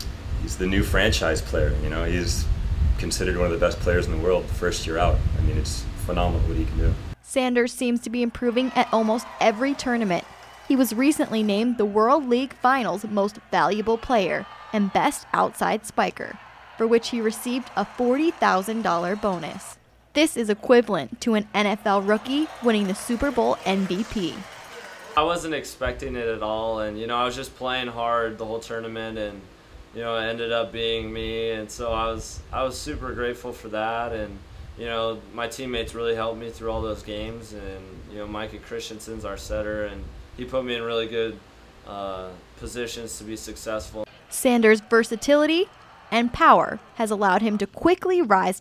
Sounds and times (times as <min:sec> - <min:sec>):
Speech: 0:00.5 - 0:24.4, 0:25.2 - 0:48.6.